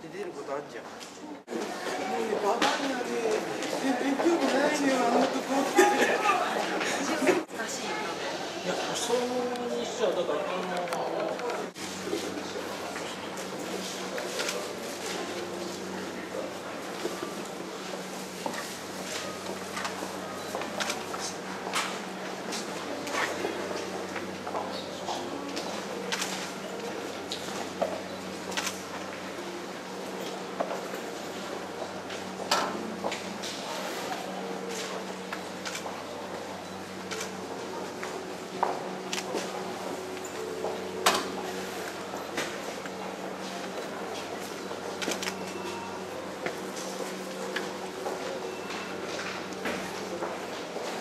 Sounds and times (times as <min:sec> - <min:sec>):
Inside, large room or hall: 0:00.0 - 0:51.0.